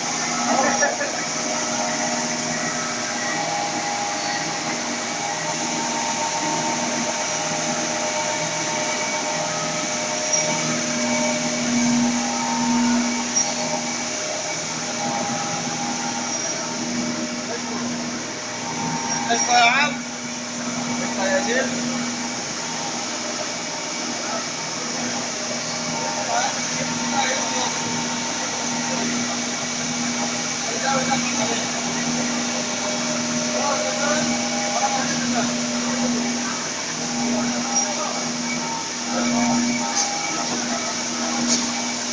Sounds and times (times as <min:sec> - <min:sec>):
Speech: 0:19.2 - 0:20.1, 0:20.9 - 0:22.0, 0:25.9 - 0:28.0, 0:30.6 - 0:32.3, 0:33.4 - 0:38.4.